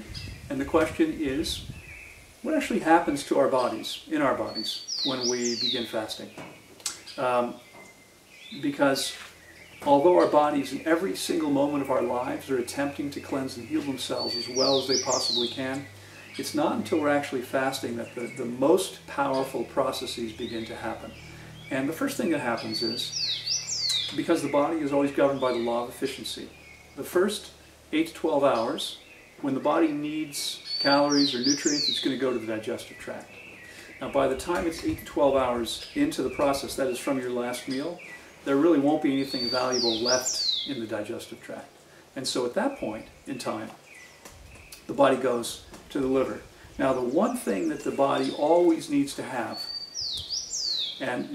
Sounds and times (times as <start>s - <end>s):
Speech: 0.0s - 1.6s, 2.5s - 6.4s, 7.2s - 7.6s, 8.6s - 9.2s, 9.8s - 23.1s, 24.1s - 33.3s, 34.0s - 43.8s, 44.9s - 49.7s, 51.0s - 51.3s
Outside, rural or natural: 0.0s - 51.3s.